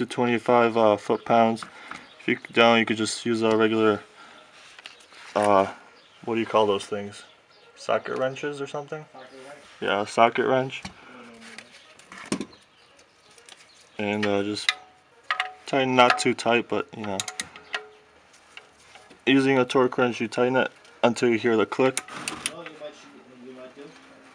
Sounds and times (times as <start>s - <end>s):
Speech: 0.0s - 1.7s, 2.3s - 4.1s, 5.4s - 11.6s, 14.0s - 14.8s, 15.7s - 17.3s, 19.3s - 24.3s.